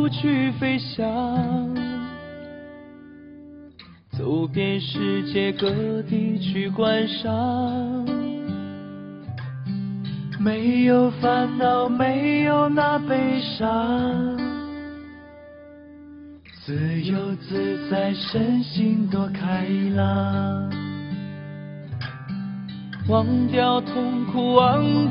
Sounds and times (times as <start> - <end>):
Music: 0.0 - 25.1.